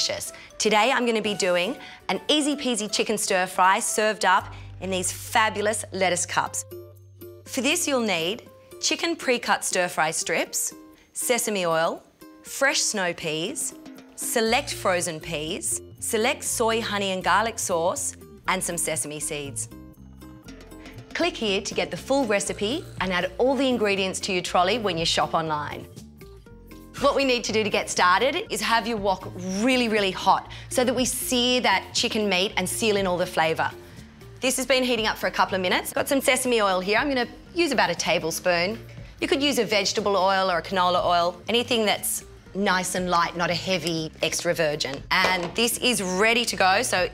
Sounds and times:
Speech: 0.0s - 6.6s, 7.5s - 19.7s, 21.2s - 25.9s, 27.0s - 33.7s, 34.4s - 47.1s
Music: 0.0s - 47.1s.

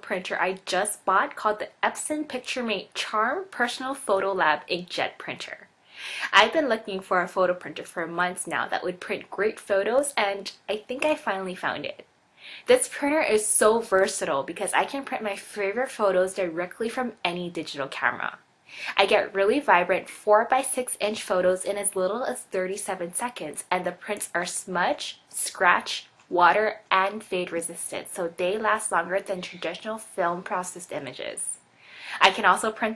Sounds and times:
Speech: 0.0s - 12.0s, 12.6s - 32.9s.

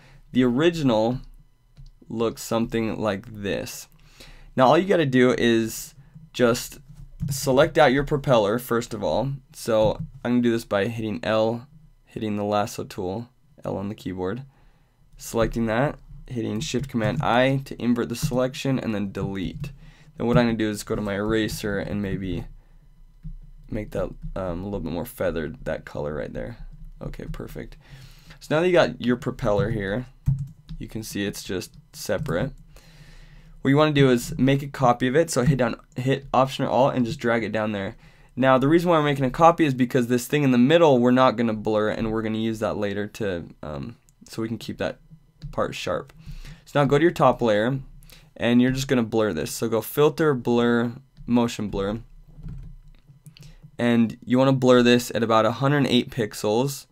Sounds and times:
Speech: 0.3s - 1.3s, 2.0s - 4.0s, 4.6s - 14.5s, 15.2s - 22.5s, 23.7s - 27.8s, 28.4s - 30.2s, 30.8s - 32.6s, 33.6s - 52.1s, 53.8s - 56.9s.

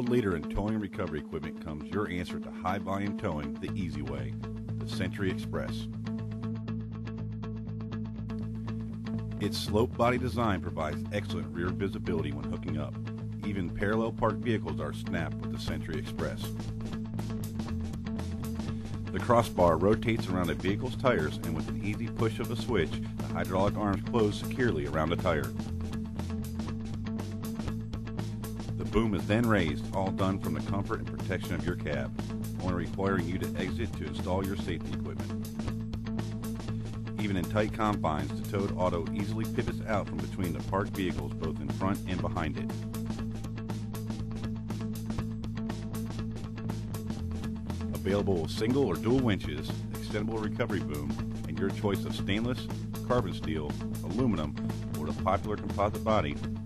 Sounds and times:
Speech: 0.0s - 5.9s, 9.4s - 16.5s, 19.1s - 25.6s, 28.8s - 35.3s, 37.2s - 42.8s, 47.9s - 56.5s
Music: 0.0s - 56.6s.

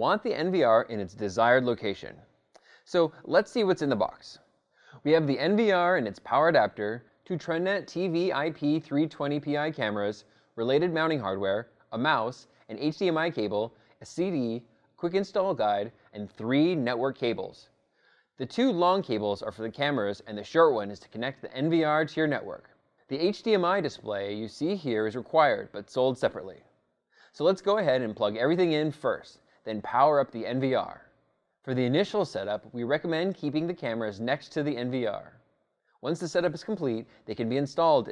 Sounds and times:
Speech: 0.0s - 17.7s, 18.4s - 26.7s, 27.3s - 35.4s, 36.0s - 38.1s.

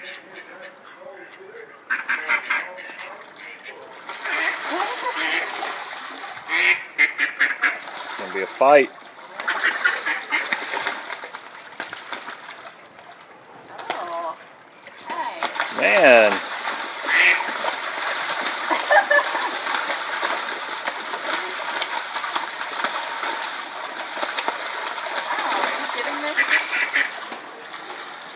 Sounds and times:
Quack: 0.0s - 5.6s, 6.5s - 7.9s, 9.4s - 10.7s, 17.1s - 17.6s, 25.5s - 27.2s
Speech: 15.1s - 16.4s.

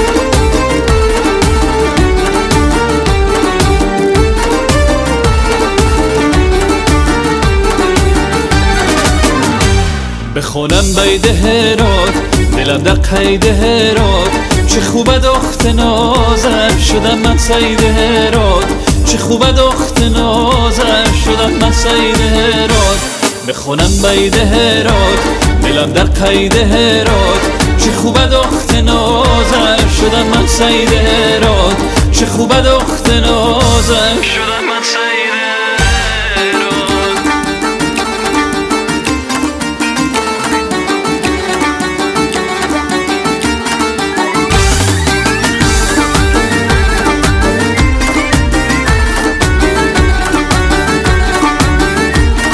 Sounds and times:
Folk music: 0.0s - 52.5s.

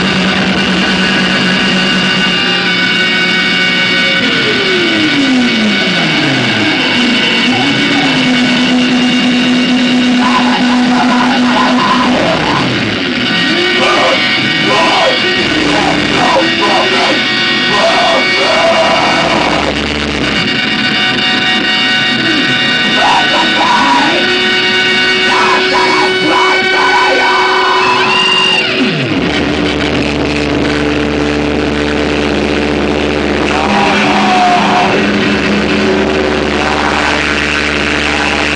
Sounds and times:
Music: 0.0s - 38.5s.

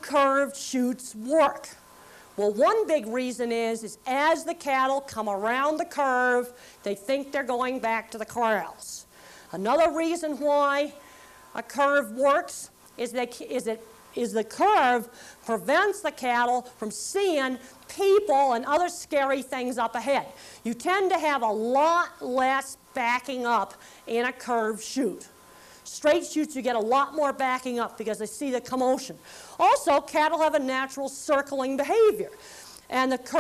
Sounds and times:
Speech: 0.0s - 1.8s, 2.4s - 11.0s, 11.6s - 25.3s, 25.9s - 33.4s.

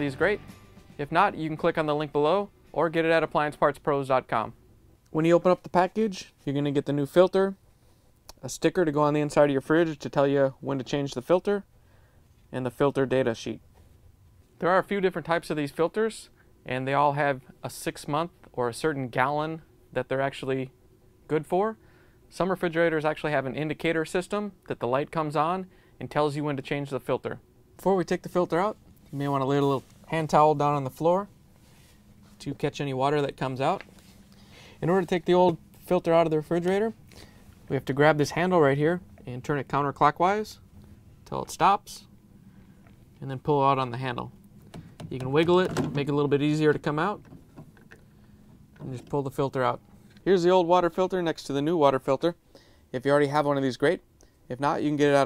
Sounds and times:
Speech: 0.0s - 0.4s, 1.0s - 7.6s, 8.3s - 11.7s, 12.5s - 13.6s, 14.6s - 20.7s, 21.3s - 31.3s, 32.4s - 33.9s, 34.8s - 37.0s, 37.7s - 40.6s, 41.3s - 42.1s, 43.2s - 44.3s, 45.1s - 47.2s, 48.8s - 55.2s
Music: 0.0s - 2.1s.

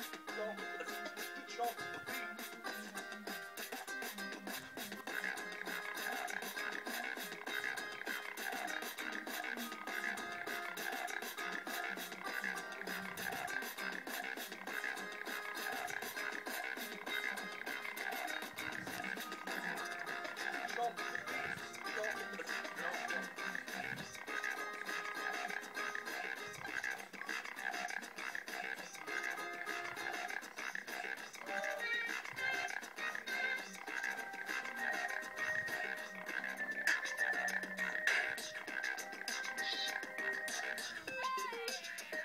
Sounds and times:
Hip hop music: 0.0s - 42.2s.

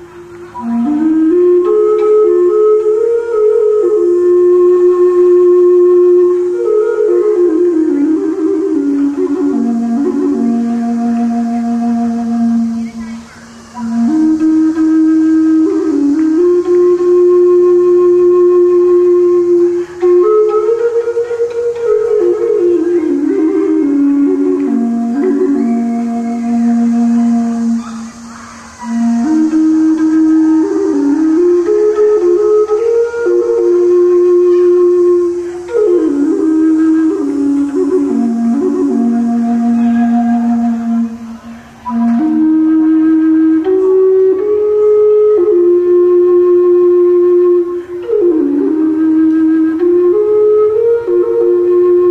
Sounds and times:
Flute: 0.0s - 52.1s.

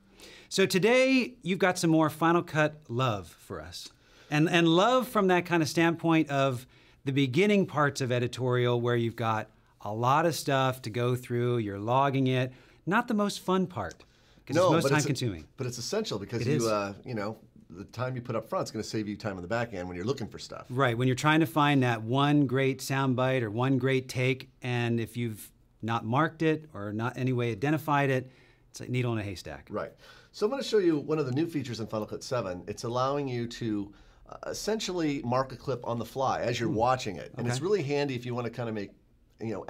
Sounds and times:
Speech: 0.5s - 39.7s.

